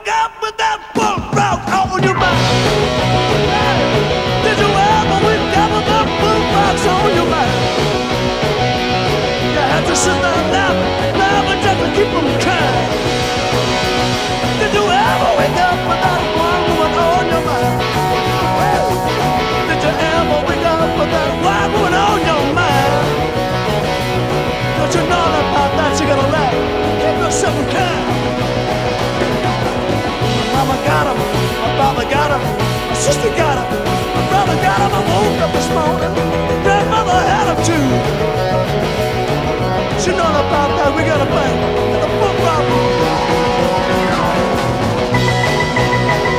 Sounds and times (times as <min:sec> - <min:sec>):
Music: 0:00.0 - 0:46.3.